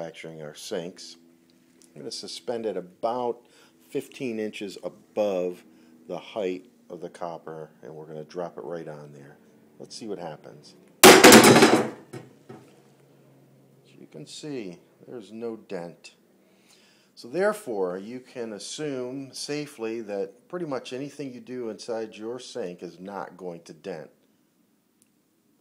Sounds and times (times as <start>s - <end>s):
Hammer: 11.0s - 12.2s.